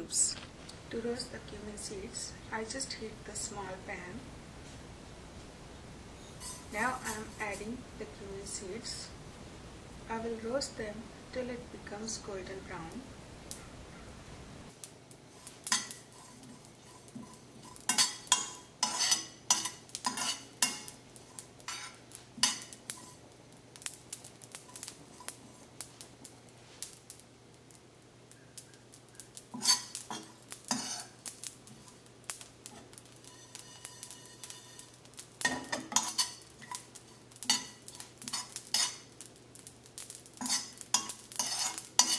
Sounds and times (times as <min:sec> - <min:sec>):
Cutlery, silverware: 0:06.3 - 0:07.4, 0:15.7 - 0:23.2, 0:29.5 - 0:31.2, 0:32.7 - 0:39.1, 0:40.4 - 0:42.1.